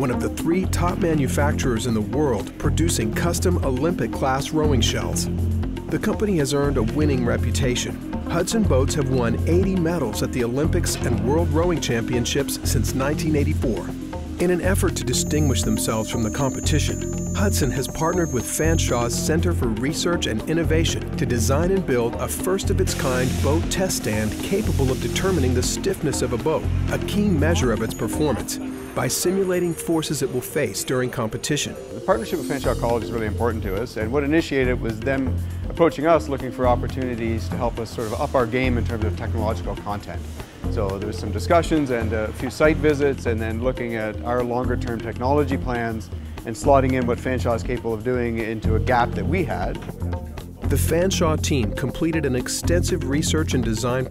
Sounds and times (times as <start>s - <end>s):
Speech: 0.0s - 5.3s, 5.9s - 49.8s, 50.7s - 54.1s
Music: 0.0s - 54.1s.